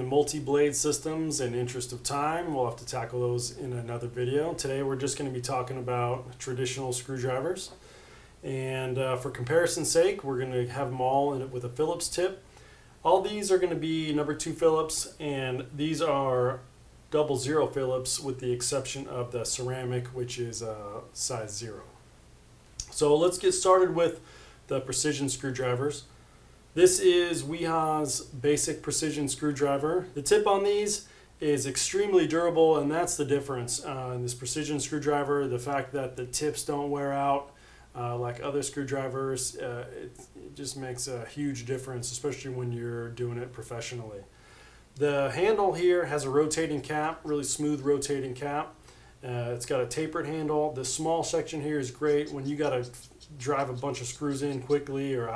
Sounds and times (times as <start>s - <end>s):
Speech: 0.0s - 7.8s, 8.4s - 22.0s, 22.8s - 26.1s, 26.8s - 44.3s, 45.0s - 55.3s.